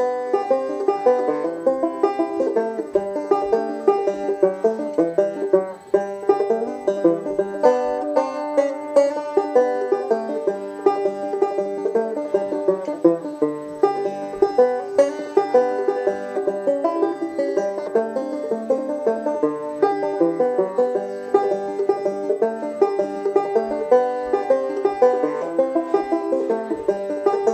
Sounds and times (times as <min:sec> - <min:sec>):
Music: 0:00.0 - 0:27.5.